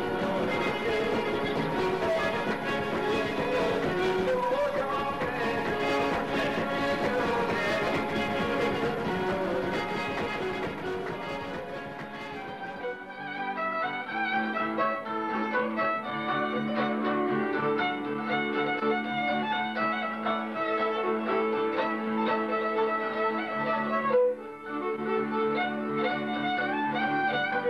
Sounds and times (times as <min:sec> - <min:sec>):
Violin, fiddle: 0:00.0 - 0:27.6.